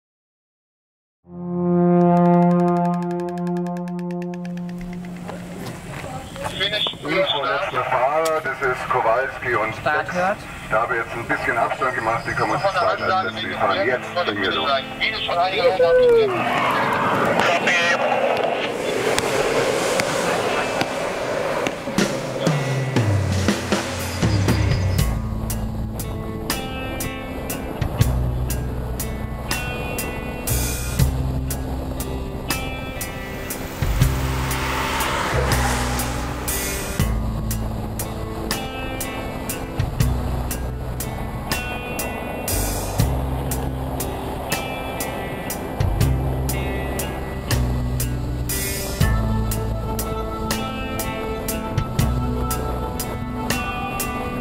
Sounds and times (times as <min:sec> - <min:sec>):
Music: 0:01.3 - 0:05.7, 0:12.5 - 0:16.4, 0:22.4 - 0:54.4
Speech: 0:05.9 - 0:18.2
Radio: 0:06.0 - 0:15.9, 0:16.5 - 0:19.3.